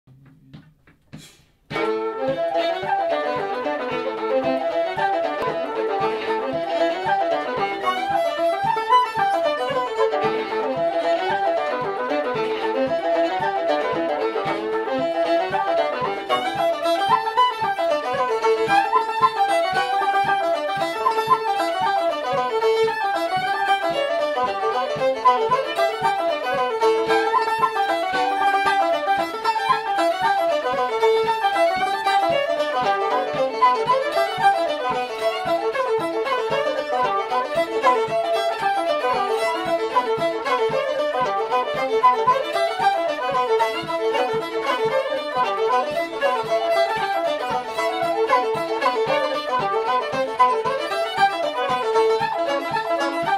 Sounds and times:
Banjo: 1.7s - 53.3s
Guitar: 1.7s - 53.3s
Violin, fiddle: 1.7s - 53.3s.

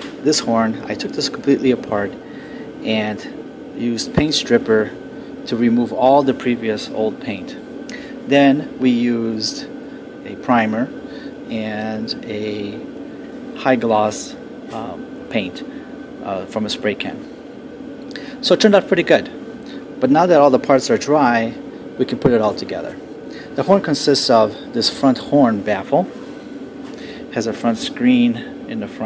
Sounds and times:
Speech: 0.2s - 2.2s, 2.8s - 7.6s, 8.3s - 12.9s, 13.6s - 17.3s, 18.4s - 19.4s, 20.0s - 26.1s, 27.3s - 29.0s.

